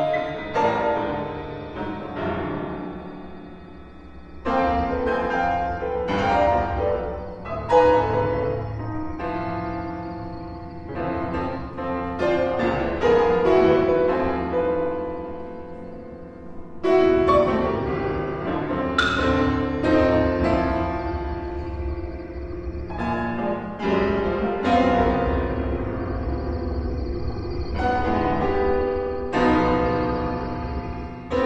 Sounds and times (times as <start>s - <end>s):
Music: 0.0s - 31.4s.